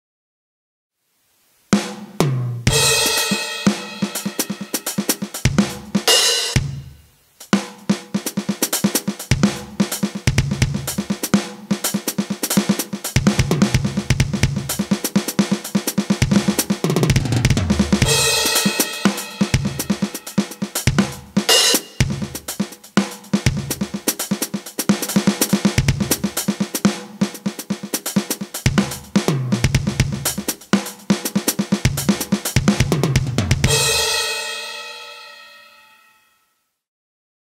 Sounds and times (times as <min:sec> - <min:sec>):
Drum kit: 0:01.7 - 0:36.1
Drum: 0:01.8 - 0:35.4.